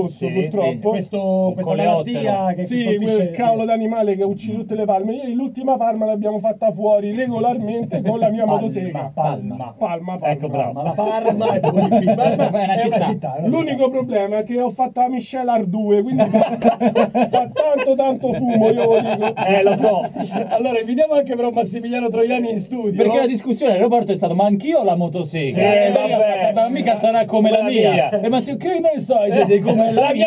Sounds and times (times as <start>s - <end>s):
Speech: 0.0s - 30.2s.